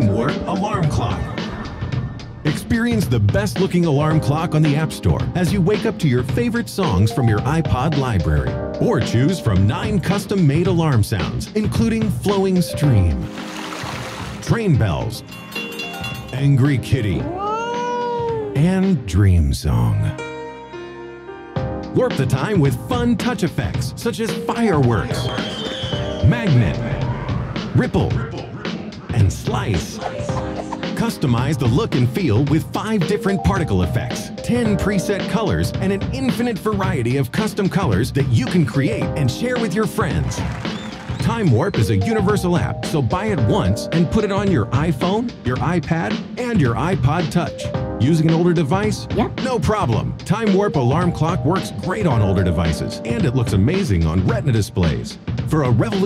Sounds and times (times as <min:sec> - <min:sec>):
Speech: 0:00.0 - 0:01.4, 0:02.5 - 0:13.2, 0:14.4 - 0:15.2, 0:16.3 - 0:20.2, 0:22.0 - 0:25.3, 0:26.2 - 0:27.1, 0:27.8 - 0:30.1, 0:31.0 - 0:40.4, 0:41.2 - 0:56.0
Music: 0:00.0 - 0:56.0.